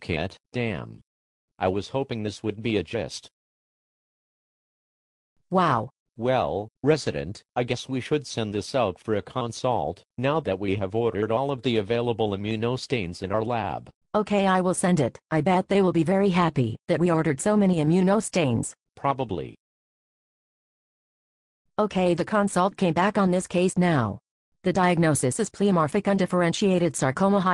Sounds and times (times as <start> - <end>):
Speech synthesizer: 0.0 - 1.0, 1.6 - 3.3, 5.6 - 19.6, 21.8 - 27.5.